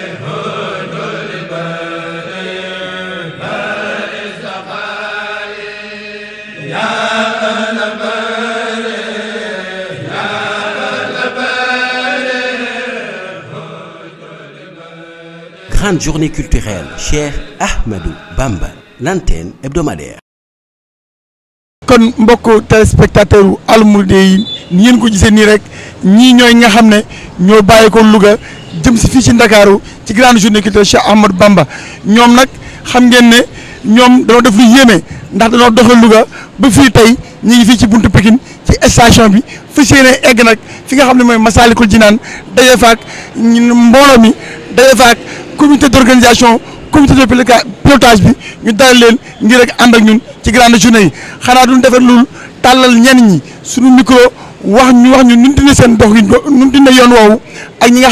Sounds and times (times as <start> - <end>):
Speech: 15.7 - 20.2, 21.9 - 58.1.